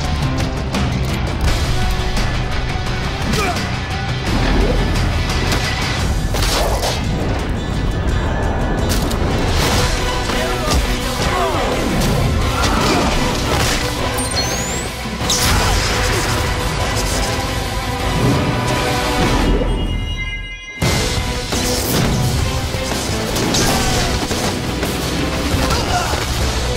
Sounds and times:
Music: 0.0s - 26.7s.

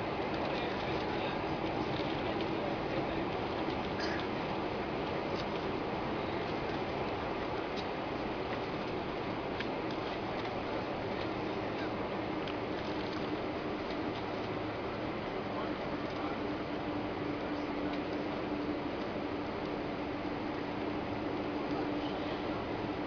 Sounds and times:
Vehicle: 0.0s - 23.0s.

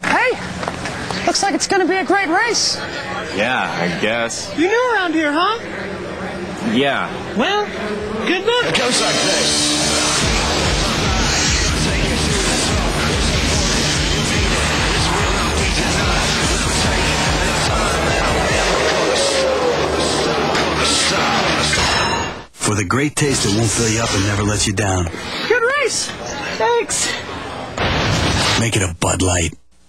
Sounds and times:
Music: 8.9s - 22.3s.

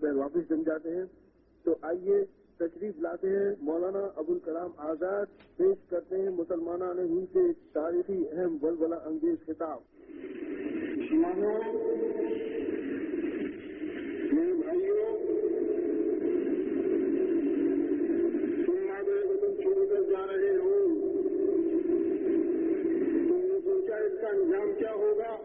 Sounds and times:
Male speech, man speaking: 0.0s - 9.8s, 11.0s - 12.5s, 14.3s - 15.6s, 18.6s - 21.2s, 23.2s - 25.4s
Narration, monologue: 0.0s - 16.9s, 18.0s - 25.4s.

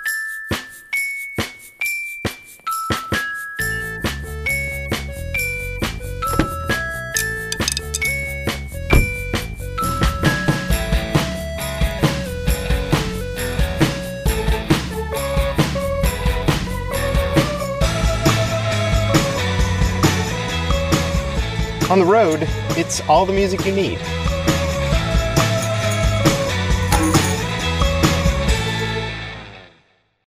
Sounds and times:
Music: 0.0s - 30.2s
Speech: 21.9s - 24.0s.

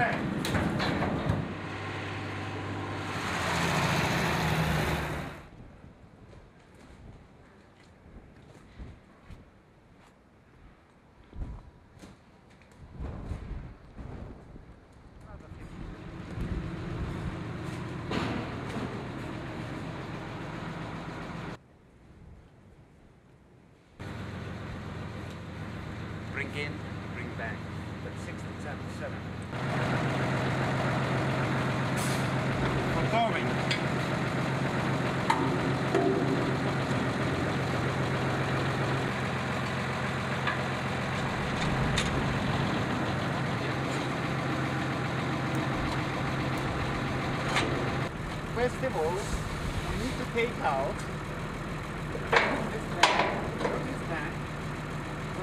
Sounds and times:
Speech: 0.0s - 0.2s, 15.2s - 15.7s, 26.3s - 29.2s, 32.9s - 33.6s, 48.6s - 49.4s, 50.0s - 51.0s, 52.4s - 54.4s.

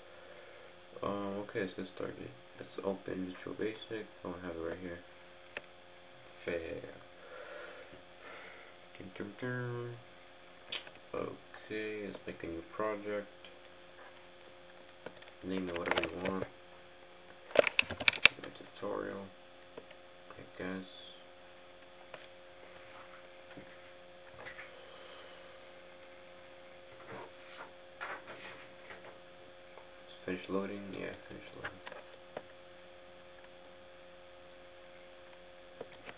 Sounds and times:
Speech: 1.0s - 5.1s, 6.3s - 7.1s, 8.9s - 10.1s, 11.1s - 13.4s, 15.4s - 16.6s, 18.3s - 19.4s, 20.3s - 21.3s, 30.1s - 31.8s.

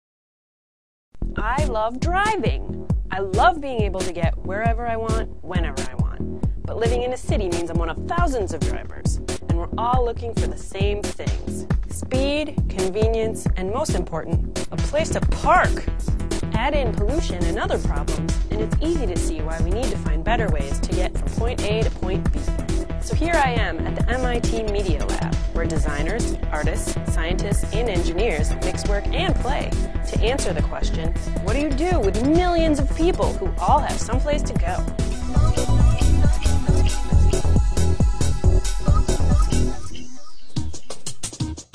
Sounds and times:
Music: 1.2s - 41.7s
Speech: 1.4s - 34.8s.

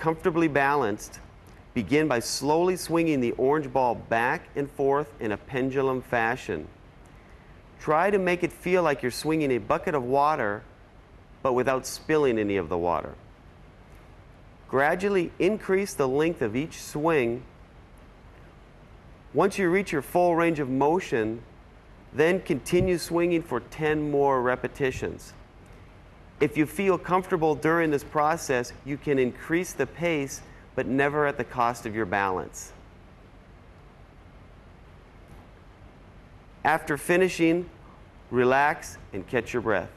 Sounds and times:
Speech: 0.0s - 1.2s, 1.8s - 6.8s, 7.8s - 10.7s, 11.4s - 13.2s, 14.7s - 17.5s, 19.4s - 21.5s, 22.2s - 25.4s, 26.4s - 32.8s, 36.6s - 39.9s.

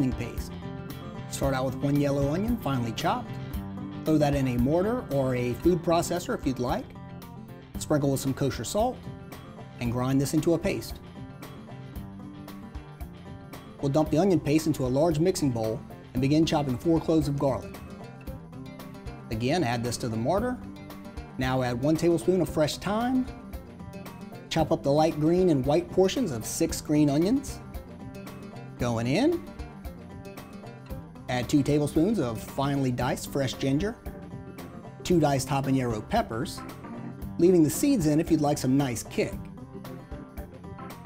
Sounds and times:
Speech: 0.0s - 0.5s, 1.3s - 3.3s, 4.1s - 6.9s, 7.8s - 9.0s, 9.8s - 11.0s, 13.8s - 17.7s, 19.3s - 20.6s, 21.4s - 23.3s, 24.5s - 27.6s, 28.8s - 29.4s, 31.3s - 34.0s, 35.1s - 36.6s, 37.4s - 39.5s
Music: 0.0s - 41.0s.

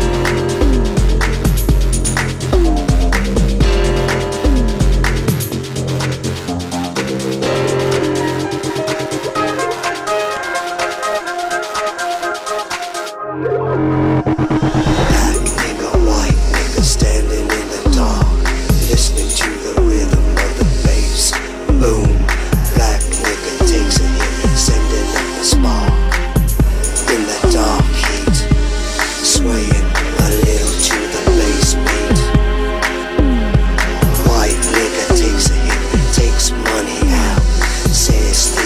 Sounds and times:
Music: 0.0s - 38.6s.

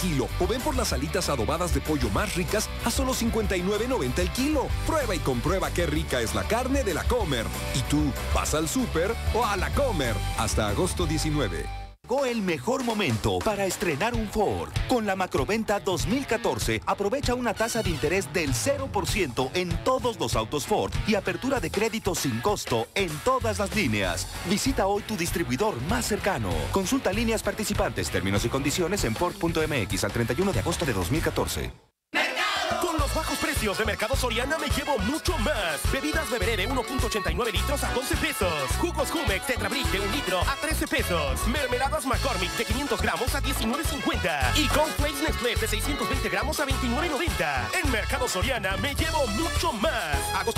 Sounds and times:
Speech: 0.0s - 31.8s, 32.7s - 50.5s
Music: 0.0s - 50.5s.

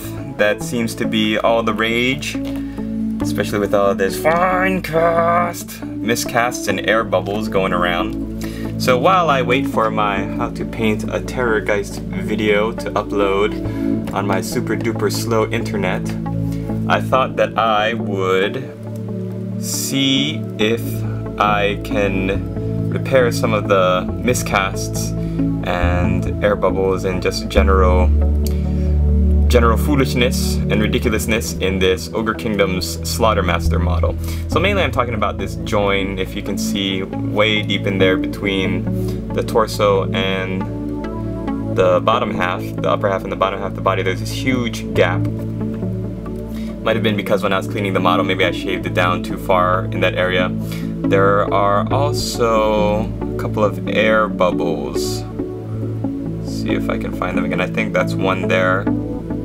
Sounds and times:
Speech: 0.0s - 2.4s, 3.2s - 8.2s, 8.8s - 16.2s, 16.9s - 18.8s, 19.6s - 28.2s, 29.5s - 40.7s, 41.8s - 45.3s, 46.8s - 55.3s, 56.4s - 58.9s
Music: 0.0s - 59.4s.

